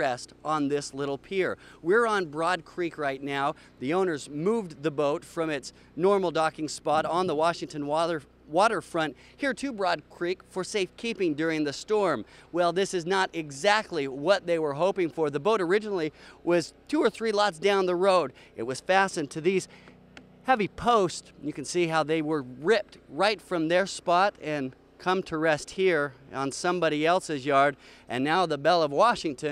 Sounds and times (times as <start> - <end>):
Speech: 0.0 - 19.7, 20.5 - 29.5.